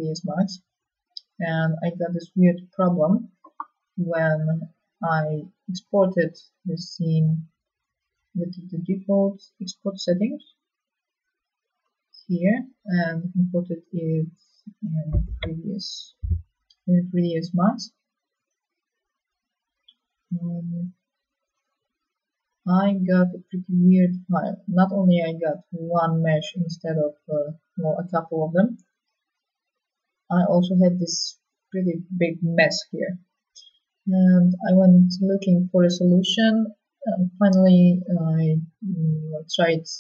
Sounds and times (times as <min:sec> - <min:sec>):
Speech: 0:00.0 - 0:00.6, 0:01.2 - 0:07.4, 0:08.4 - 0:10.5, 0:12.2 - 0:17.9, 0:20.4 - 0:20.9, 0:22.7 - 0:28.8, 0:30.3 - 0:33.2, 0:34.1 - 0:40.0.